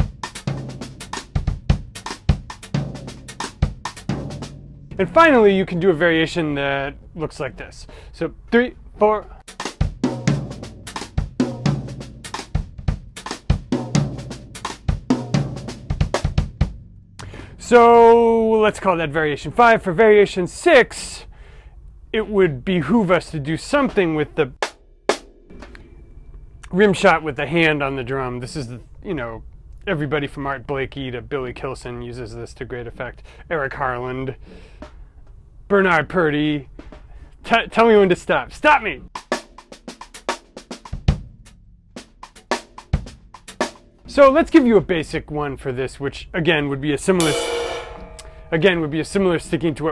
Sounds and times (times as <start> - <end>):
Speech: 5.0 - 9.4, 17.6 - 21.3, 22.1 - 24.6, 26.6 - 34.4, 35.7 - 36.7, 37.4 - 39.1, 44.1 - 47.5, 48.5 - 49.9.